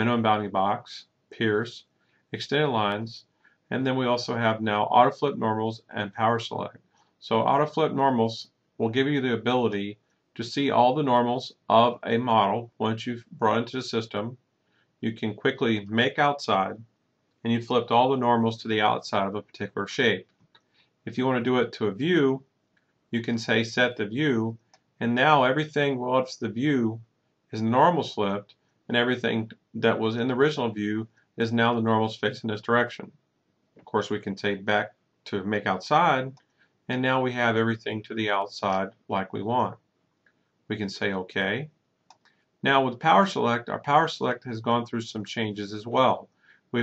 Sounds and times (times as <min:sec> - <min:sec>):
Speech: 0:00.0 - 0:01.8, 0:02.4 - 0:14.4, 0:15.0 - 0:16.8, 0:17.5 - 0:20.2, 0:21.1 - 0:22.4, 0:23.2 - 0:27.0, 0:27.6 - 0:33.1, 0:33.8 - 0:39.8, 0:40.7 - 0:41.7, 0:42.6 - 0:46.8.